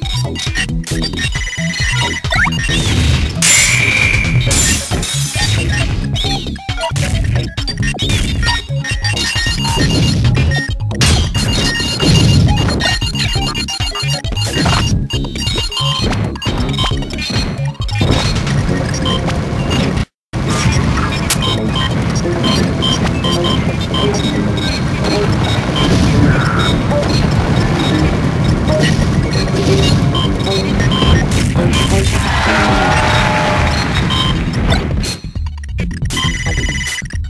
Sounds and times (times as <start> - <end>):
Music: 0.0 - 20.0, 21.3 - 37.2.